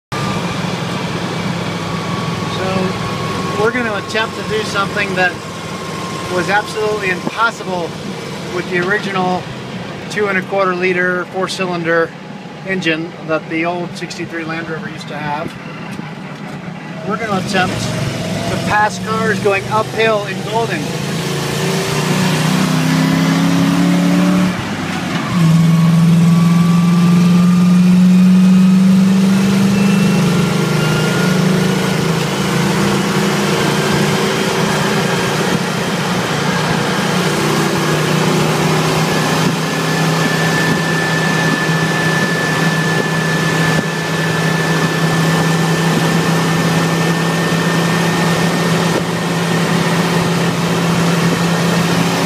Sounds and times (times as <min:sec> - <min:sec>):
Car: 0:00.1 - 0:52.2
Speech: 0:02.5 - 0:03.0, 0:03.6 - 0:05.4, 0:06.3 - 0:07.9, 0:08.5 - 0:09.5, 0:10.1 - 0:12.1, 0:12.7 - 0:15.6, 0:17.0 - 0:17.9, 0:18.5 - 0:20.9.